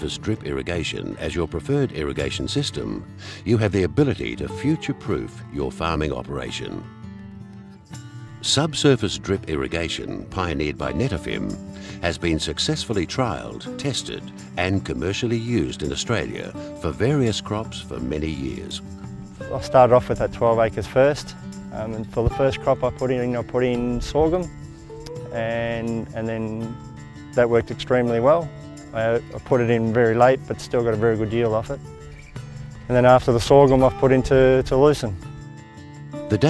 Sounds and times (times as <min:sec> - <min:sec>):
Speech: 0:00.0 - 0:06.8, 0:08.4 - 0:18.8, 0:19.5 - 0:24.5, 0:25.3 - 0:26.8, 0:27.4 - 0:31.8, 0:32.9 - 0:35.2
Music: 0:00.0 - 0:36.4.